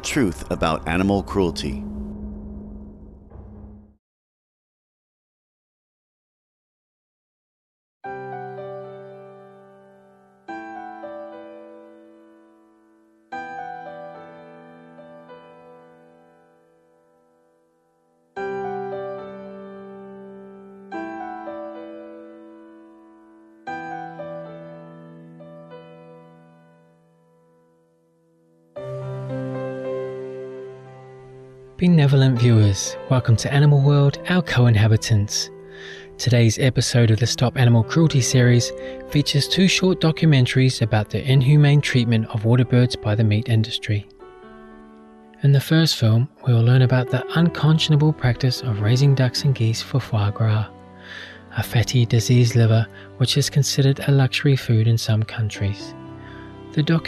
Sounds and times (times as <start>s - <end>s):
Music: 0.0s - 4.0s, 8.0s - 57.0s.